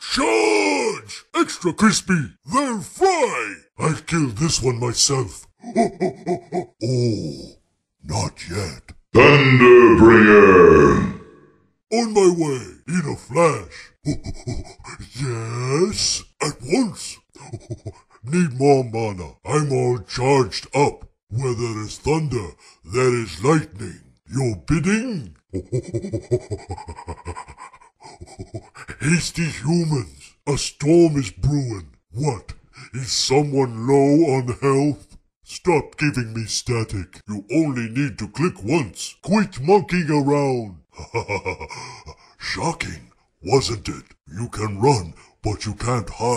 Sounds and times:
Speech: 0:00.0 - 0:26.2, 0:27.3 - 0:46.3.

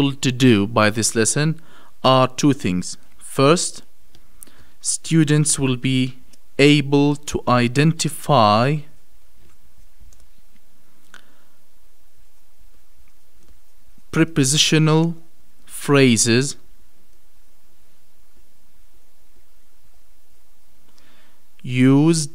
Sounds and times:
Speech: 0:00.0 - 0:03.9, 0:04.8 - 0:09.0, 0:14.1 - 0:16.6, 0:21.6 - 0:22.3.

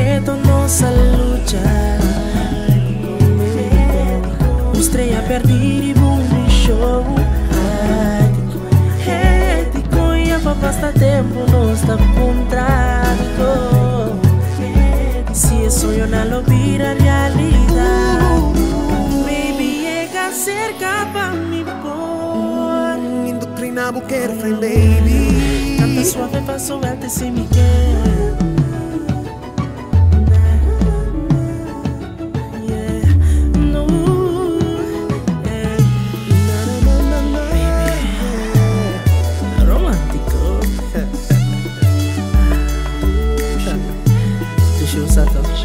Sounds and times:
Music: 0:00.0 - 0:45.6.

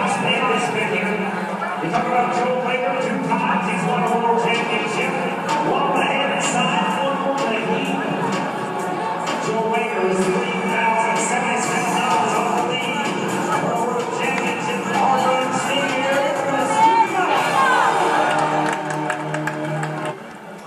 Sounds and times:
Speech: 0:00.0 - 0:18.2
Music: 0:00.0 - 0:20.6.

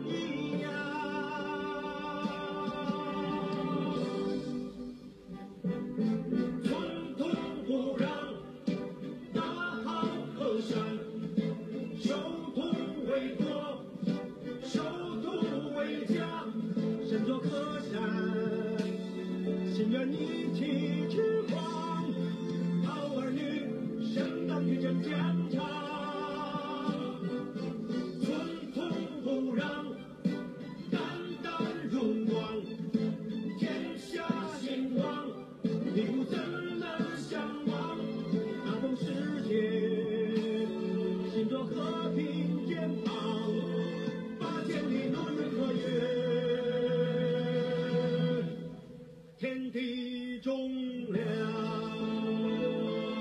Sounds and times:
Male singing: 0:00.0 - 0:04.4, 0:06.6 - 0:11.2, 0:12.0 - 0:27.6, 0:28.2 - 0:30.1, 0:30.9 - 0:32.8, 0:33.6 - 0:48.7, 0:49.4 - 0:53.2
Music: 0:00.0 - 0:53.2.

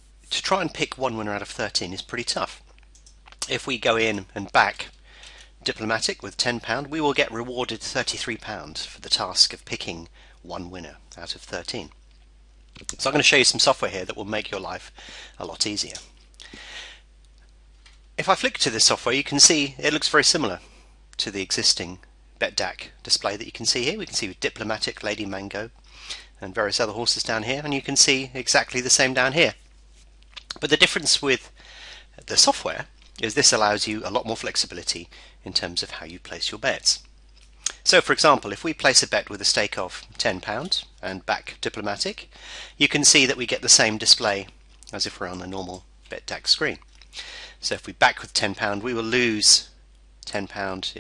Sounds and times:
Speech: 0:00.3 - 0:02.7, 0:03.4 - 0:05.0, 0:05.6 - 0:12.0, 0:12.8 - 0:16.1, 0:18.2 - 0:29.6, 0:30.4 - 0:31.5, 0:32.2 - 0:37.1, 0:37.7 - 0:46.8, 0:47.6 - 0:51.0.

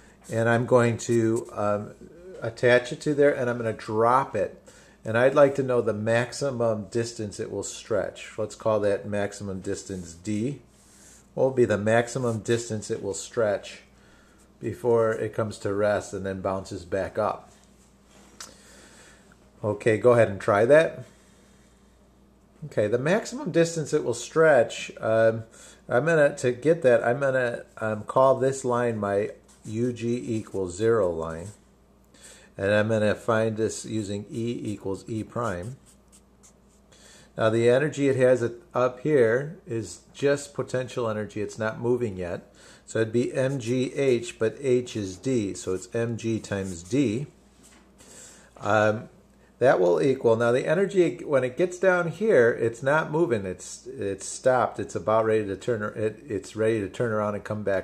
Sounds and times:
Speech: 0:00.3 - 0:10.7, 0:11.4 - 0:13.9, 0:14.6 - 0:17.5, 0:19.6 - 0:21.1, 0:22.6 - 0:31.6, 0:32.6 - 0:35.9, 0:37.4 - 0:47.4, 0:48.6 - 0:57.8.

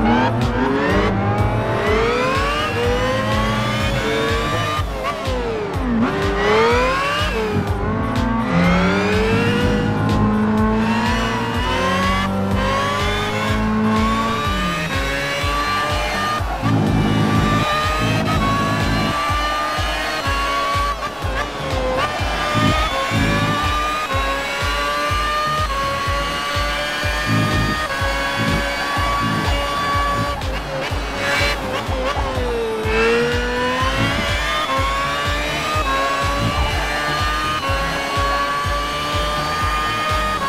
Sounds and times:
Motor vehicle (road): 0:00.0 - 0:40.4
Music: 0:00.0 - 0:40.4.

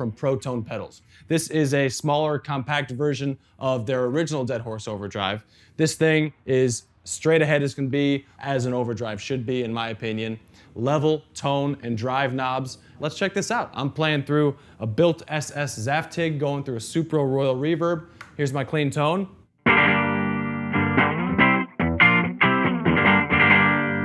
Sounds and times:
Speech: 0:00.0 - 0:19.4
Music: 0:19.6 - 0:24.0.

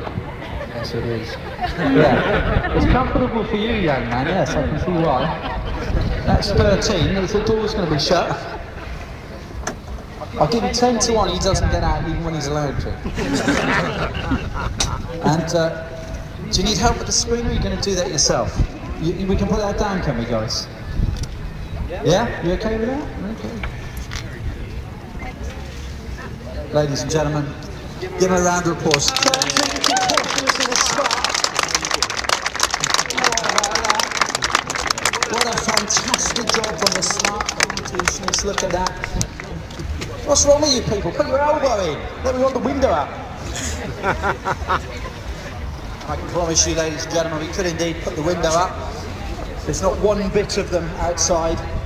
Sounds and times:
Hubbub, speech noise, speech babble: 0:00.0 - 0:51.8.

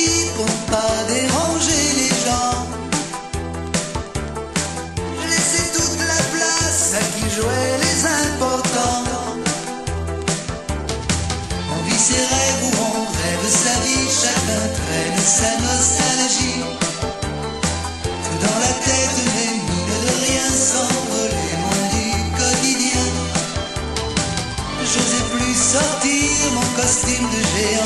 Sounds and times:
Music: 0:00.0 - 0:27.8.

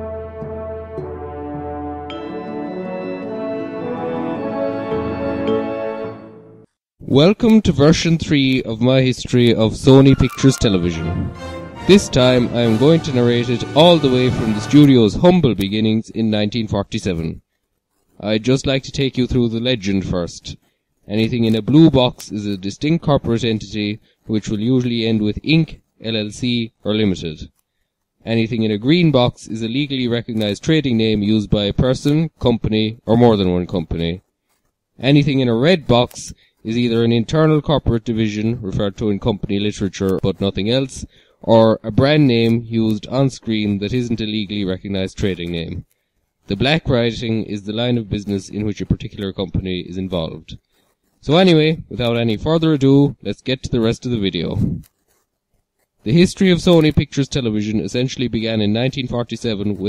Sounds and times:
Speech: 0:07.0 - 0:17.4, 0:18.2 - 0:27.5, 0:28.2 - 0:34.2, 0:35.0 - 0:45.9, 0:46.5 - 0:50.6, 0:51.2 - 0:54.8, 0:56.1 - 0:59.8.

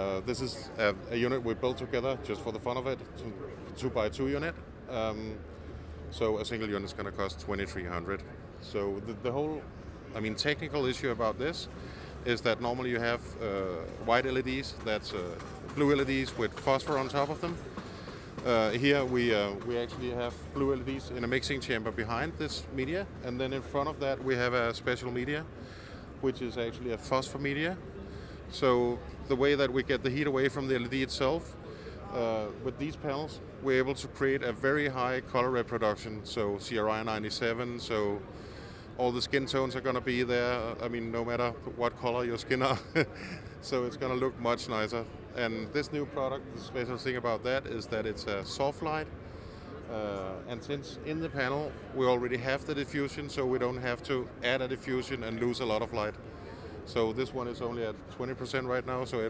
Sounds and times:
Speech: 0:00.0 - 0:05.4, 0:06.1 - 0:17.6, 0:18.4 - 0:25.5, 0:26.2 - 0:27.8, 0:28.5 - 0:38.3, 0:39.0 - 0:49.1, 0:49.8 - 0:59.3.

